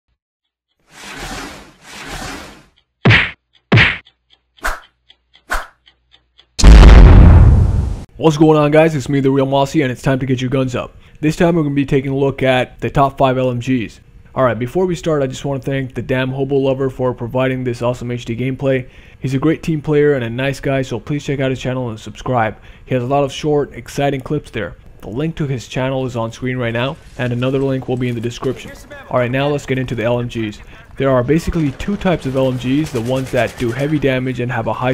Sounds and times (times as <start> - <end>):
Whack, thwack: 3.1 - 4.0.